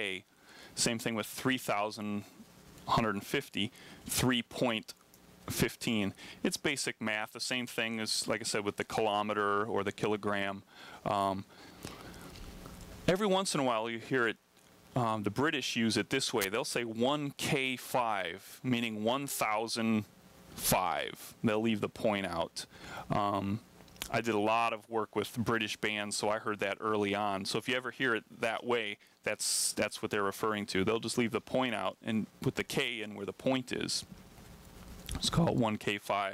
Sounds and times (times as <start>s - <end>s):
Speech: 0.0s - 11.5s, 13.1s - 14.4s, 15.0s - 34.1s, 35.1s - 36.3s.